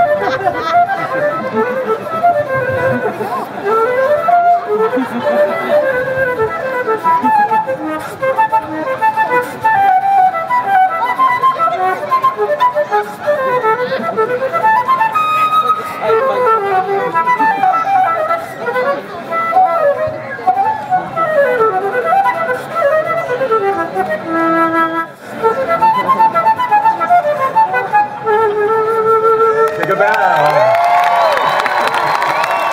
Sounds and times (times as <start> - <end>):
Music: 0.0 - 30.0.